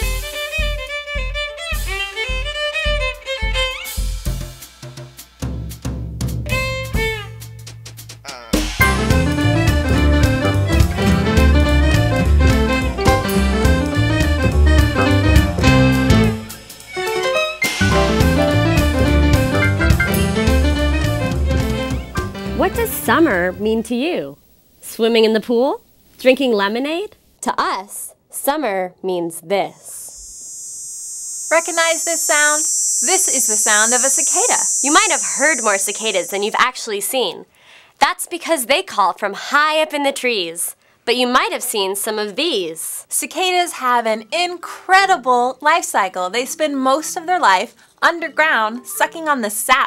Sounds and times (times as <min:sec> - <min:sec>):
Speech: 0:08.3 - 0:08.6, 0:22.6 - 0:30.1, 0:31.6 - 0:49.8.